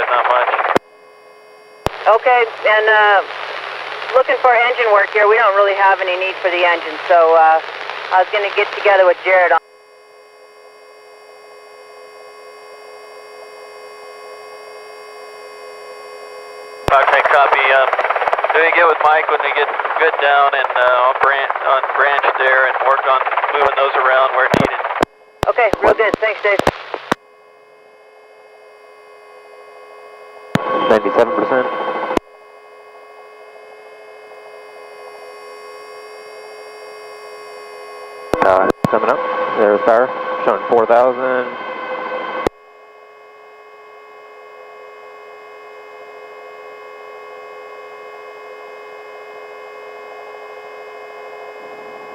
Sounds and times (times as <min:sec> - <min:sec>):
Speech: 0:00.0 - 0:00.8, 0:02.1 - 0:03.2, 0:04.1 - 0:07.6, 0:16.9 - 0:18.0, 0:18.6 - 0:26.7, 0:30.7 - 0:31.7, 0:38.4 - 0:41.6.